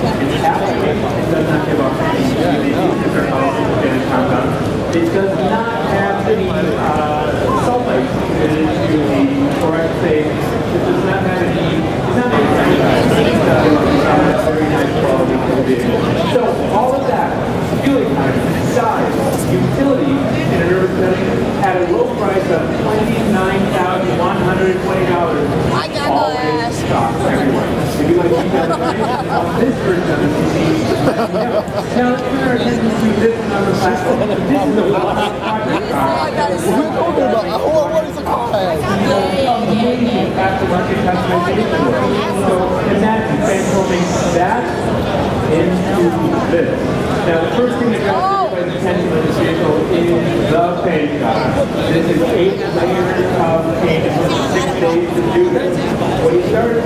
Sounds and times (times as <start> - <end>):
Speech: 0.0 - 56.8.